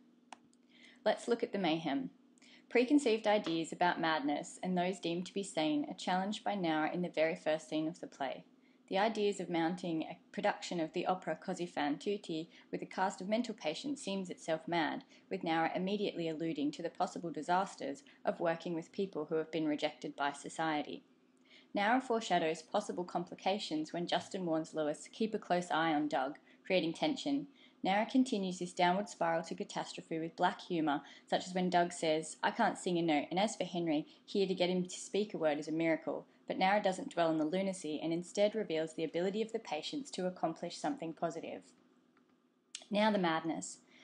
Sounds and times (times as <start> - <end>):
Narration, monologue: 0.0 - 44.0
Female speech, woman speaking: 1.1 - 2.1, 2.7 - 21.0, 21.8 - 41.6, 42.8 - 43.8.